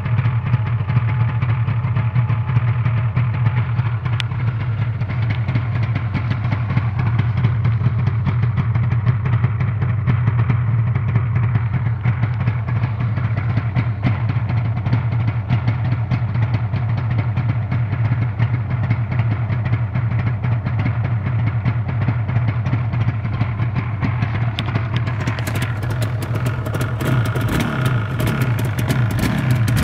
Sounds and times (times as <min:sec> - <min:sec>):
Medium engine (mid frequency): 0:00.0 - 0:29.8.